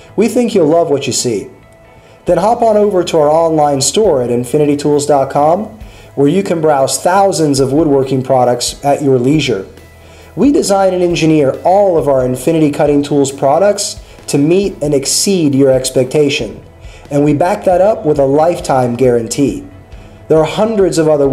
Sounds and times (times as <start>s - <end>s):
Music: 0.0s - 21.3s
Speech: 0.2s - 1.6s, 2.3s - 9.7s, 10.4s - 19.7s, 20.3s - 21.3s.